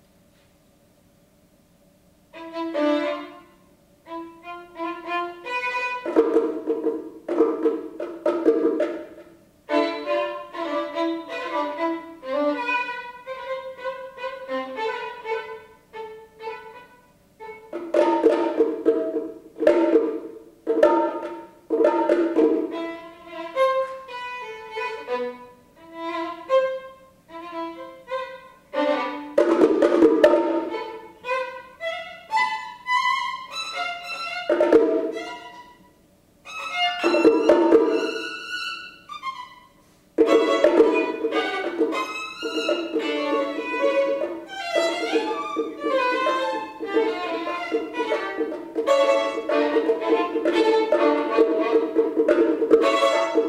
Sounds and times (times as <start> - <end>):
Violin, fiddle: 2.3 - 6.6, 9.7 - 18.6, 22.3 - 29.5, 30.2 - 53.4.